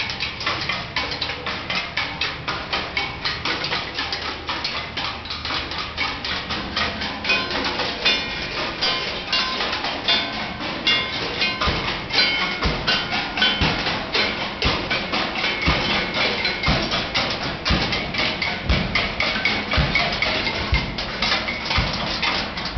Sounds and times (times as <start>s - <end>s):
Percussion: 0.0s - 22.7s.